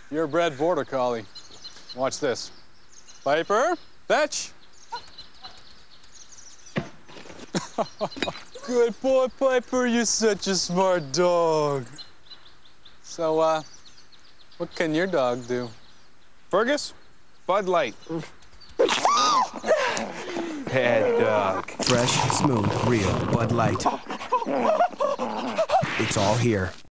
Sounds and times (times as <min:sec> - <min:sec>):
Speech: 0:20.7 - 0:23.9, 0:25.9 - 0:26.8.